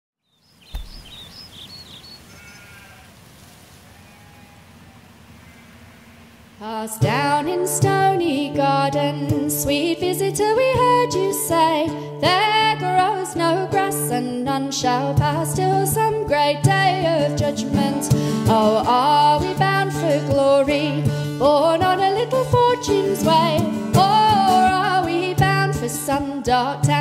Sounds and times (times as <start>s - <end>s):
Environmental noise: 0.2s - 26.6s.